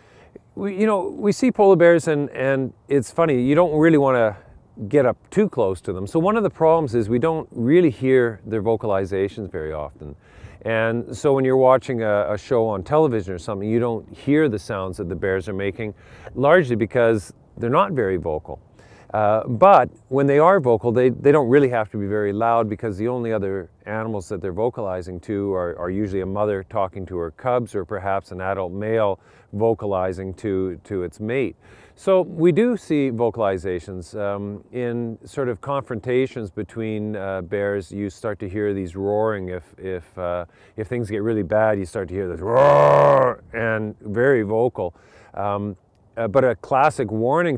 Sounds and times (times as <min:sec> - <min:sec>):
Speech: 0:00.5 - 0:47.5.